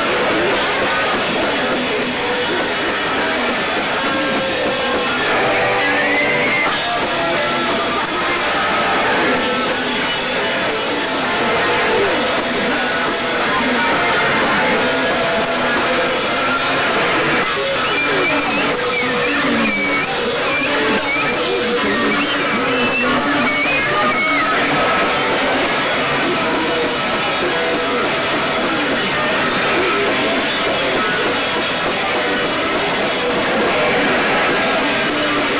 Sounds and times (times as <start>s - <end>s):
Music: 0.0s - 35.6s.